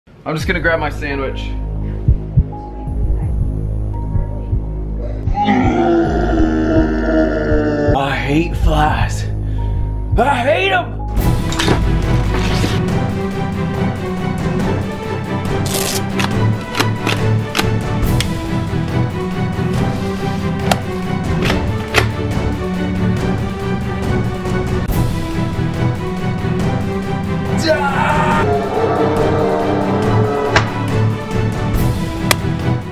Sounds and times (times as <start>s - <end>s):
Music: 0.1s - 32.9s
Speech: 0.2s - 1.5s, 8.0s - 9.3s, 10.2s - 10.9s.